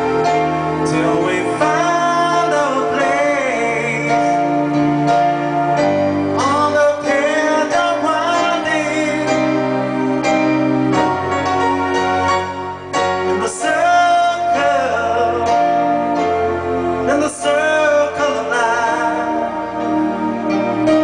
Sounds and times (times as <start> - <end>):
Piano: 0.0 - 21.0.